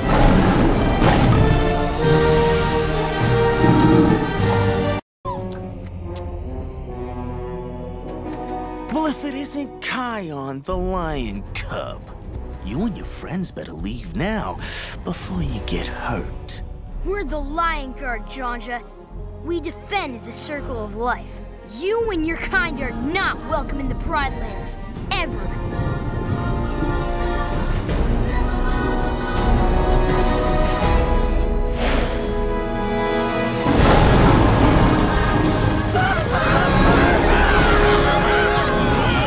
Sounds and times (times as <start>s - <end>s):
Theme music: 0.0s - 39.2s.